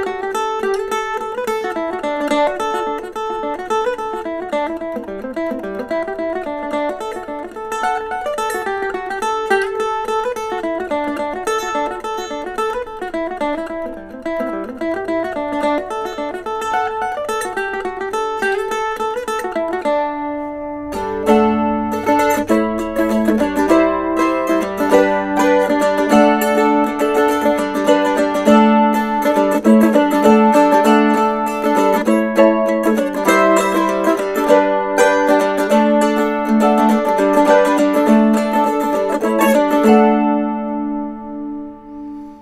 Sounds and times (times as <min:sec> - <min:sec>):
Mandolin: 0:00.0 - 0:42.4.